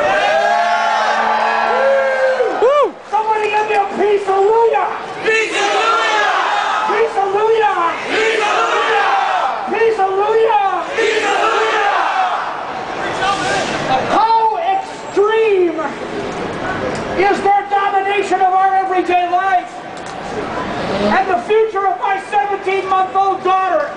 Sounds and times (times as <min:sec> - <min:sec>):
Crowd: 0:00.0 - 0:23.9
Battle cry: 0:05.2 - 0:06.9, 0:08.0 - 0:09.7, 0:10.8 - 0:12.6.